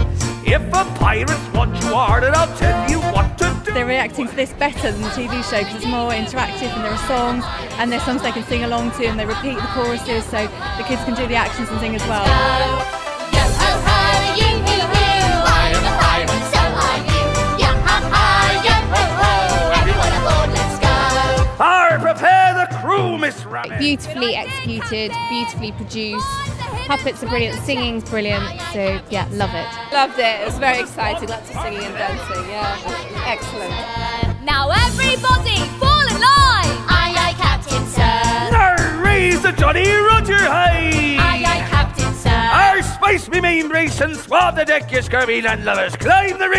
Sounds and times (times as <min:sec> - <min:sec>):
Music: 0:00.0 - 0:46.5.